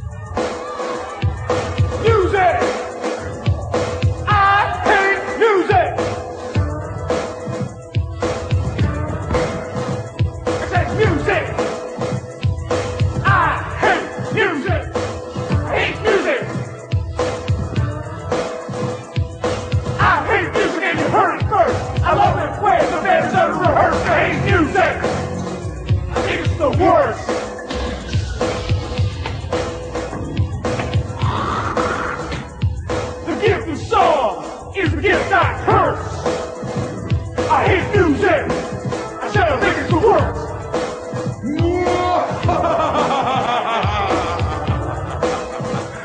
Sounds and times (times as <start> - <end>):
Music: 0.0 - 46.0.